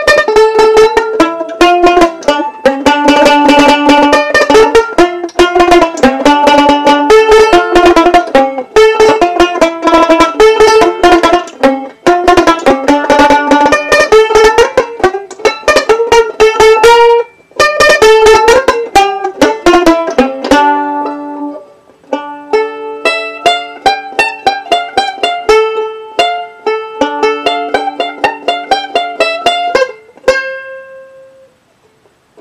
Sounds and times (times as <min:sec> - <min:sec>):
Banjo: 0:00.0 - 0:32.4.